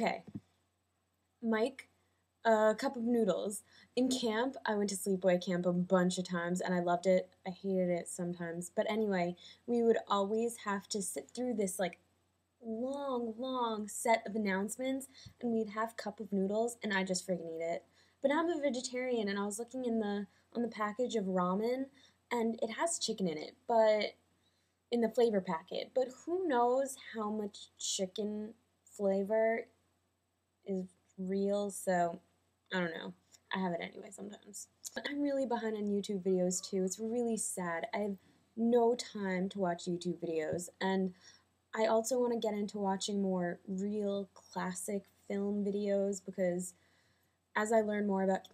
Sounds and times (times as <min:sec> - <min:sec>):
Speech: 0:00.0 - 0:00.4, 0:01.4 - 0:01.9, 0:02.5 - 0:12.0, 0:12.6 - 0:24.2, 0:25.0 - 0:29.7, 0:30.7 - 0:41.2, 0:41.8 - 0:46.8, 0:47.6 - 0:48.5.